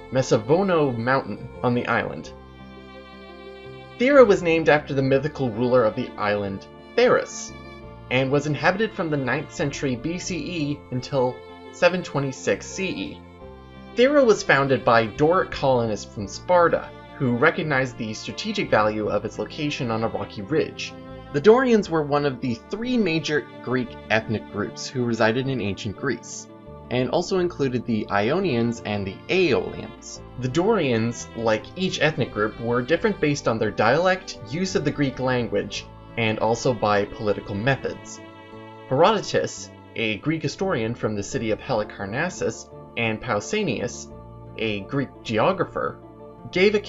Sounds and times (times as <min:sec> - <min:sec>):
Speech: 0:00.0 - 0:02.3, 0:04.0 - 0:07.5, 0:08.1 - 0:13.2, 0:14.0 - 0:38.2, 0:38.9 - 0:46.8
Music: 0:00.0 - 0:46.8.